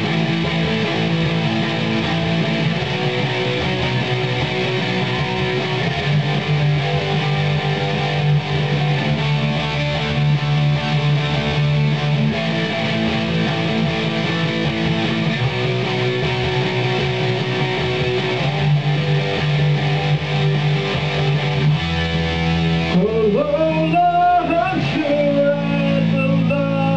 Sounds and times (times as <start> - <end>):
Electric guitar: 0.0 - 26.9.